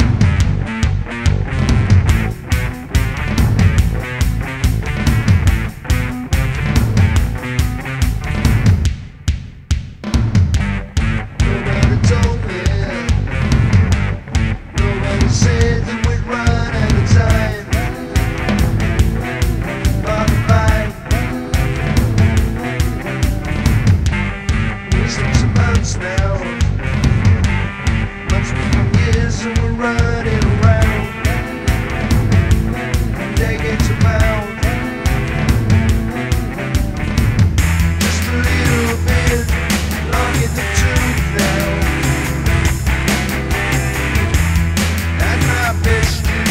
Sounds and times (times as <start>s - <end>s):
Music: 0.0s - 46.5s.